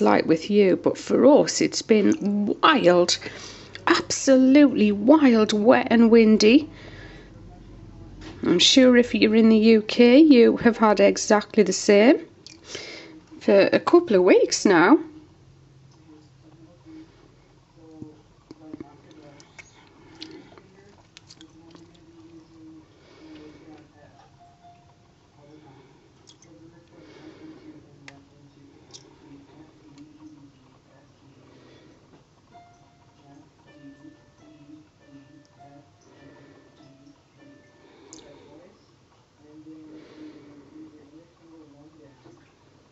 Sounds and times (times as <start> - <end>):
Speech: 0.0 - 12.3, 13.0 - 15.4, 16.0 - 24.4, 25.4 - 31.9, 37.0 - 42.5
Inside, small room: 0.0 - 42.9.